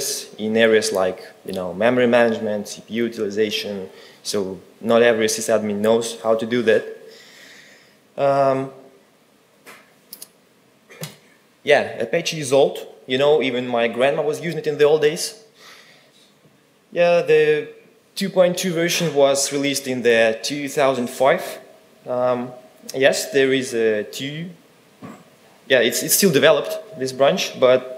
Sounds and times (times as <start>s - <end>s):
Speech: 0.0s - 7.1s, 8.2s - 8.9s, 11.6s - 15.5s, 16.9s - 24.6s, 25.7s - 27.9s.